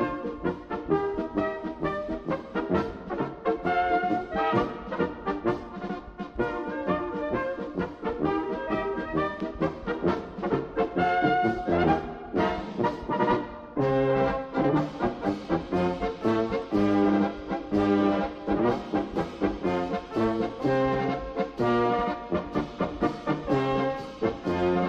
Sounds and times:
Music: 0.0s - 24.8s.

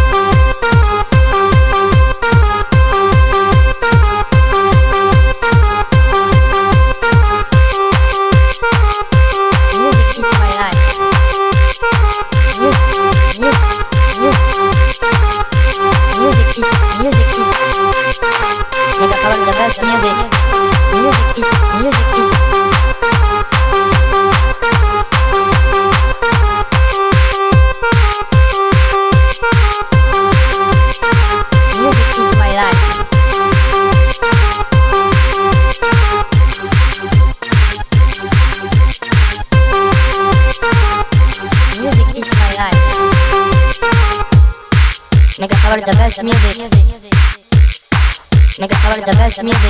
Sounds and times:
Music: 0.0s - 49.6s
Speech: 9.8s - 10.9s, 12.6s - 14.5s, 16.1s - 17.7s, 19.0s - 22.4s, 31.7s - 32.9s, 41.8s - 43.0s, 45.4s - 47.2s, 48.6s - 49.6s.

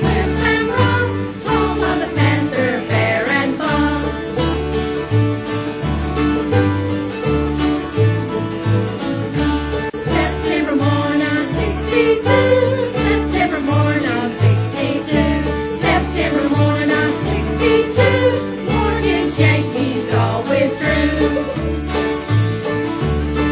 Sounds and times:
Country: 0.0s - 23.5s.

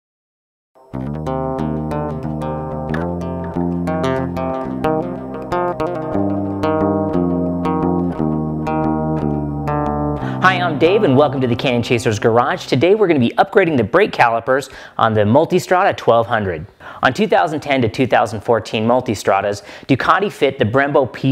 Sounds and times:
Bass guitar: 1.0s - 14.3s.

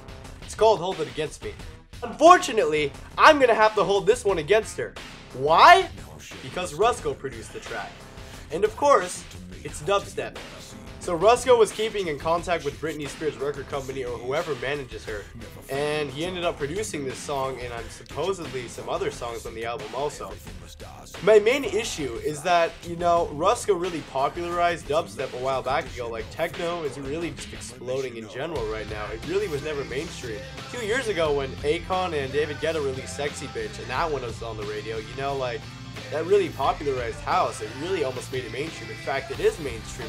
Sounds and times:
Speech: 0.5s - 7.9s, 8.5s - 40.0s
Dubstep: 5.4s - 40.0s.

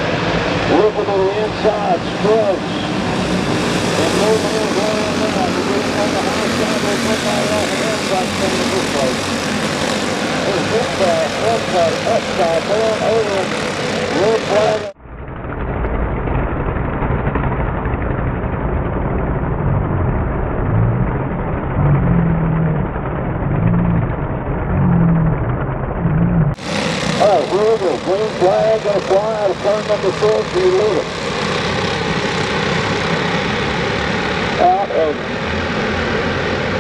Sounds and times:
Speech: 0.7s - 2.7s, 4.0s - 9.2s, 10.4s - 15.0s, 27.2s - 31.1s, 34.6s - 35.2s.

